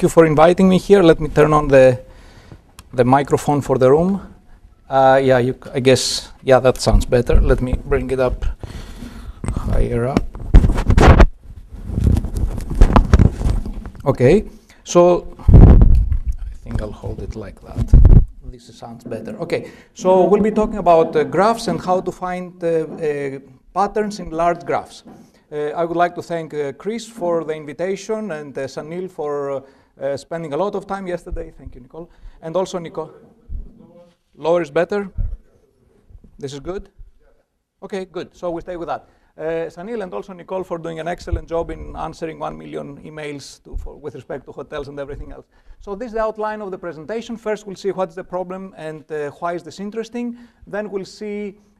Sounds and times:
Speech: 0:00.0 - 0:02.0, 0:02.9 - 0:04.3, 0:04.9 - 0:08.5, 0:09.5 - 0:10.3, 0:14.0 - 0:15.3, 0:16.5 - 0:33.2, 0:33.8 - 0:35.2, 0:36.4 - 0:51.6.

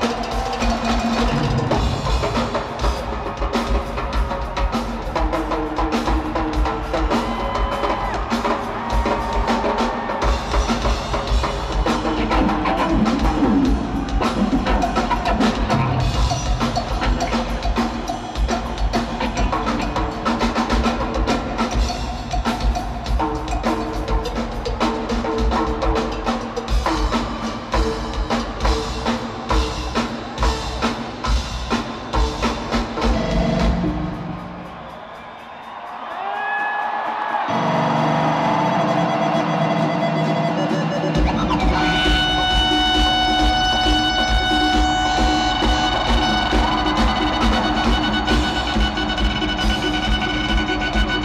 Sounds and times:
Drum kit: 0:00.0 - 0:51.2.

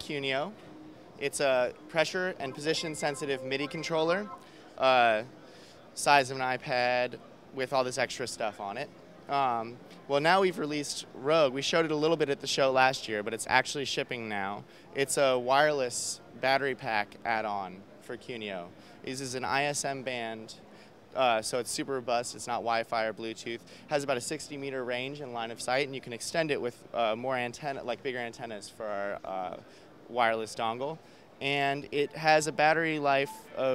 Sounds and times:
Speech: 0:00.0 - 0:00.6, 0:01.2 - 0:33.7.

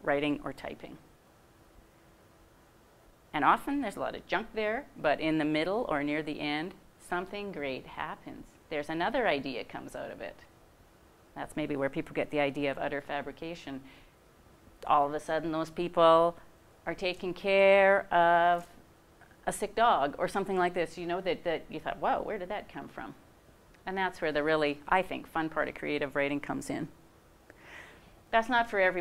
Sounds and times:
Speech: 0:00.0 - 0:01.0, 0:03.4 - 0:10.5, 0:11.4 - 0:13.8, 0:14.8 - 0:18.8, 0:19.4 - 0:23.2, 0:23.8 - 0:27.0, 0:28.3 - 0:29.0.

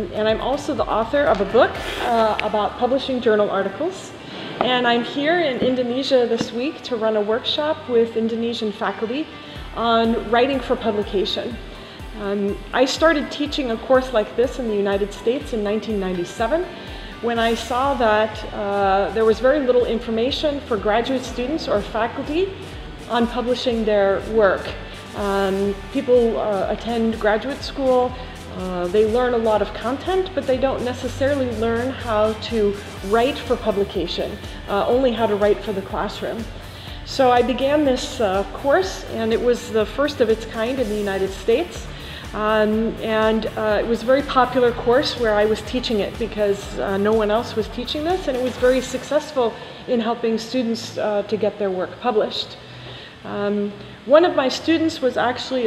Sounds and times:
Speech: 0:00.0 - 0:11.6, 0:12.2 - 0:16.7, 0:17.3 - 0:22.5, 0:23.1 - 0:36.5, 0:37.1 - 0:41.8, 0:42.4 - 0:52.6, 0:53.3 - 0:55.6
Music: 0:00.0 - 0:55.6.

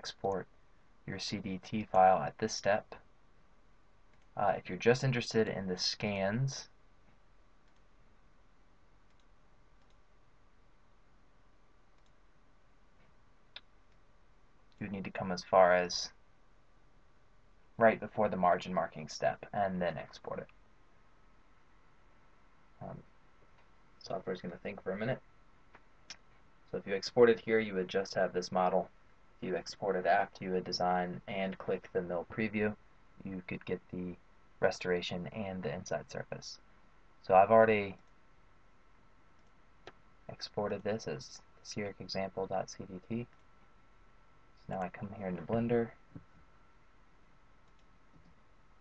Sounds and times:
Speech: 0:00.0 - 0:00.5, 0:01.1 - 0:03.0, 0:04.4 - 0:06.7, 0:14.8 - 0:16.2, 0:17.8 - 0:20.5, 0:22.8 - 0:23.0, 0:24.0 - 0:25.2, 0:26.7 - 0:36.6, 0:37.2 - 0:38.0, 0:40.3 - 0:43.3, 0:44.6 - 0:46.0.

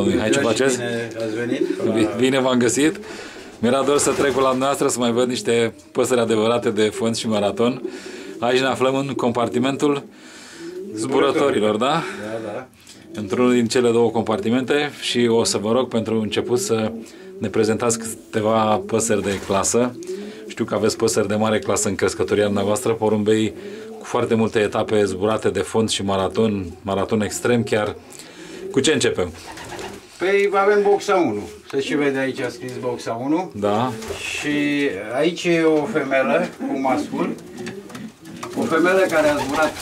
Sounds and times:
Speech: 0:00.0 - 0:03.0, 0:03.6 - 0:07.8, 0:08.4 - 0:10.0, 0:10.9 - 0:28.0, 0:30.2 - 0:37.4, 0:38.5 - 0:39.8
Inside, small room: 0:00.0 - 0:39.8.

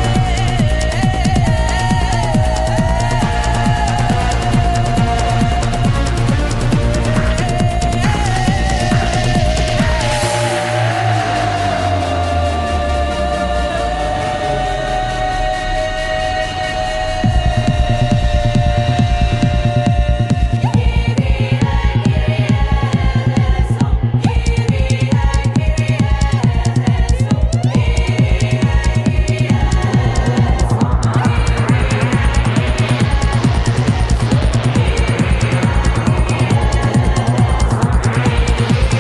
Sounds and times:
Techno: 0:00.0 - 0:39.0
Trance music: 0:00.0 - 0:39.0.

